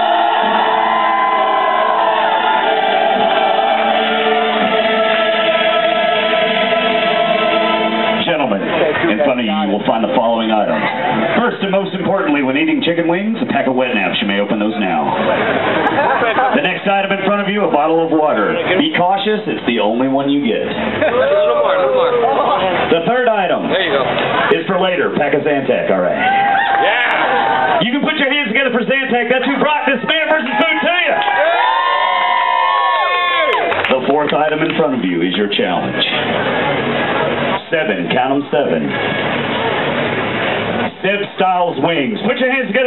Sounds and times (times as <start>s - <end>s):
Speech: 8.2s - 15.2s, 16.5s - 26.2s, 27.8s - 31.2s, 33.9s - 36.3s, 37.6s - 39.0s, 40.9s - 42.8s.